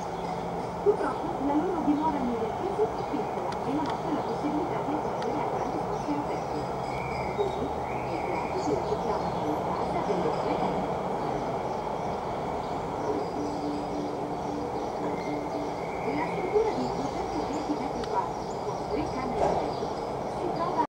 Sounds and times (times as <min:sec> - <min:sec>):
Speech: 0:00.0 - 0:11.4, 0:16.0 - 0:20.8.